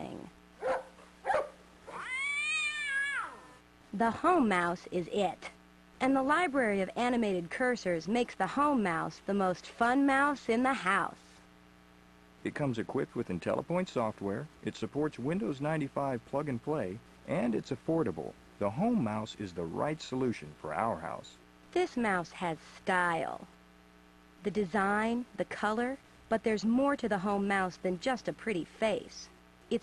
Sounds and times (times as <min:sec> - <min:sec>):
Speech: 0:00.0 - 0:00.3, 0:04.0 - 0:11.2, 0:12.5 - 0:23.5, 0:24.4 - 0:29.8.